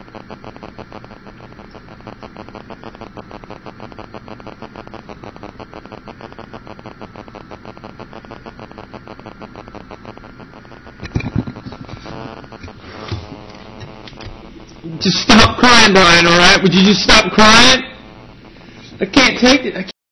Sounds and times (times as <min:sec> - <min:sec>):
Speech: 0:14.9 - 0:18.0, 0:19.0 - 0:20.0.